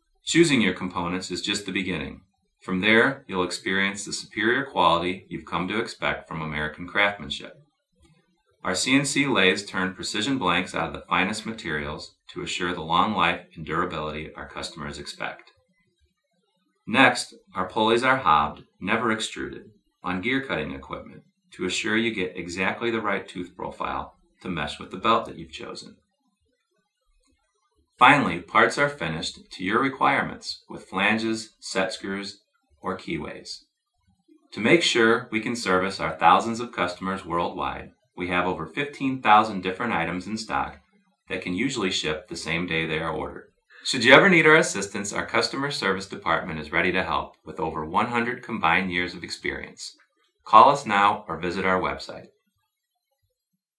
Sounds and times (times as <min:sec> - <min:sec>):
Speech: 0:00.3 - 0:07.6, 0:08.7 - 0:15.5, 0:16.9 - 0:26.0, 0:28.0 - 0:33.6, 0:34.6 - 0:52.3.